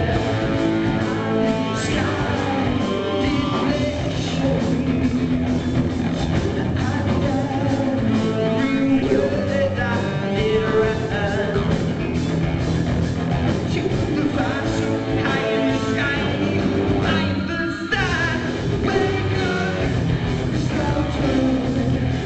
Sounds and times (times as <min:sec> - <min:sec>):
Music: 0:00.0 - 0:22.2.